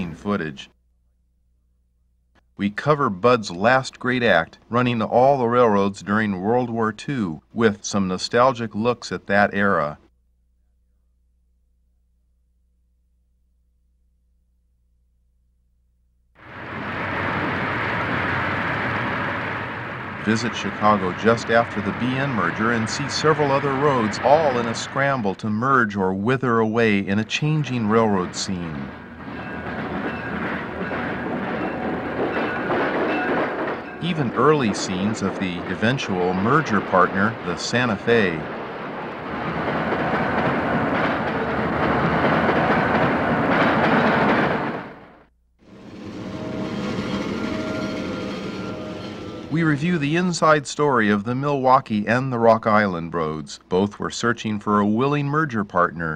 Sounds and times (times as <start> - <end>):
Train: 0.0 - 0.4, 16.4 - 50.4
Speech: 0.0 - 0.8, 2.6 - 10.1, 20.2 - 29.0, 34.0 - 38.5, 49.5 - 56.1
Railroad car, train wagon: 16.4 - 51.2.